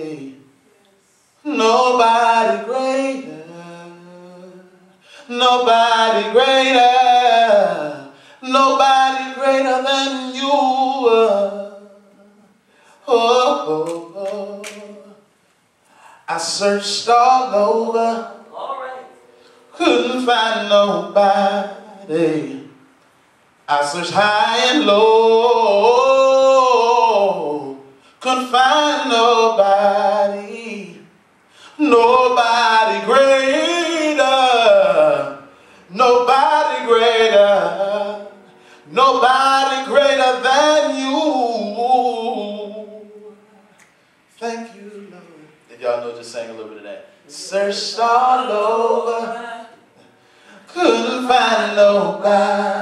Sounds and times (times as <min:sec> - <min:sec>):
Male singing: 0:00.0 - 0:00.4, 0:01.4 - 0:15.2, 0:16.3 - 0:18.5, 0:19.8 - 0:22.7, 0:23.7 - 0:31.0, 0:31.7 - 0:43.7, 0:47.3 - 0:49.8, 0:50.6 - 0:52.8.